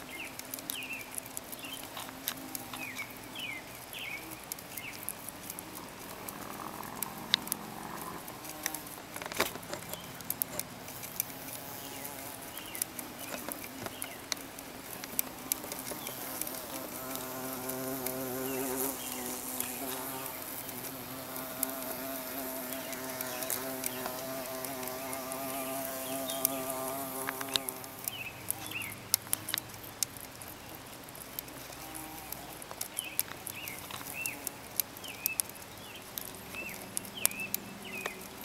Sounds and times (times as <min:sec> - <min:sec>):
Patter: 0:00.0 - 0:38.4
Fly, housefly: 0:11.0 - 0:14.3, 0:14.9 - 0:28.8.